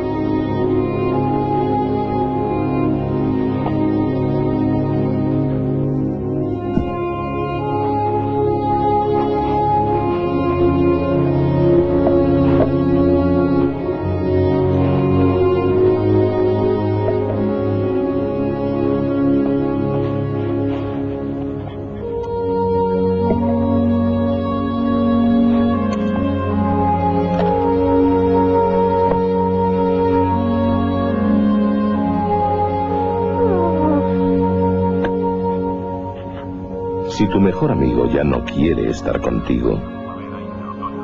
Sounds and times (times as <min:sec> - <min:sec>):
Music: 0:00.0 - 0:41.0.